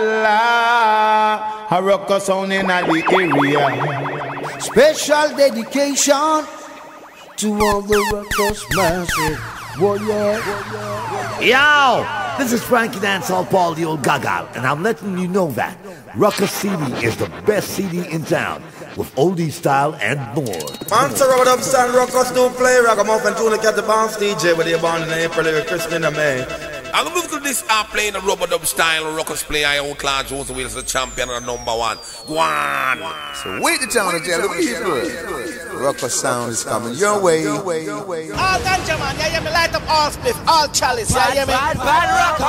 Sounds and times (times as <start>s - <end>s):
Music: 20.6s - 28.5s.